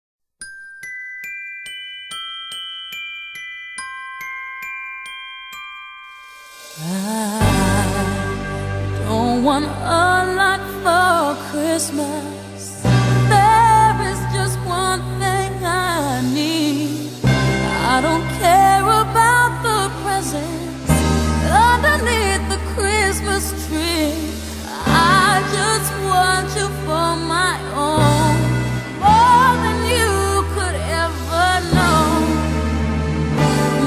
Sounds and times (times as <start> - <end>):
Glockenspiel: 0.4 - 9.2.